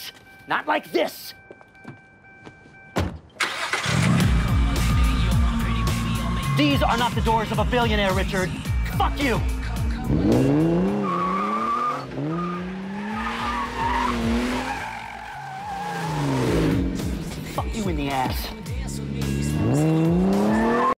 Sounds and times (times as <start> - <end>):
Music: 3.8 - 11.0, 16.5 - 20.9.